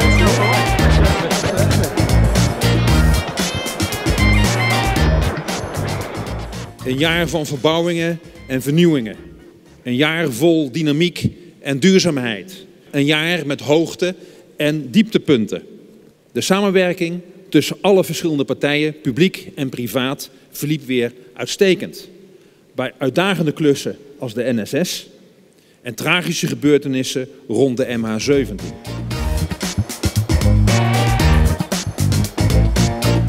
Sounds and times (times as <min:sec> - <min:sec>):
Speech: 0:06.8 - 0:09.2, 0:09.9 - 0:15.6, 0:16.4 - 0:22.1, 0:22.8 - 0:25.1, 0:25.9 - 0:28.7.